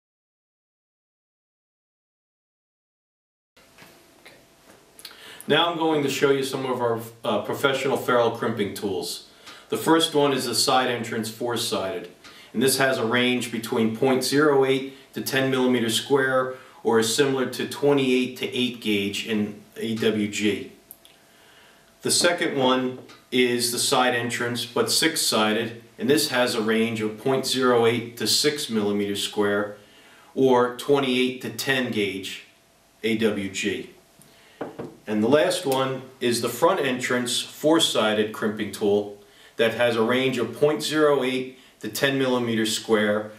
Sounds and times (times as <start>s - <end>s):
Speech: 5.5s - 20.8s, 22.0s - 29.8s, 30.4s - 34.0s, 35.1s - 43.3s.